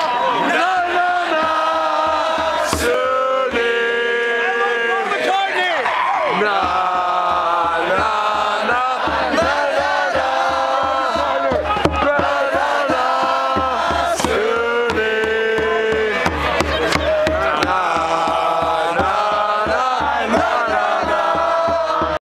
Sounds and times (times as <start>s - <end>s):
Music: 0.5s - 4.6s, 6.3s - 22.2s.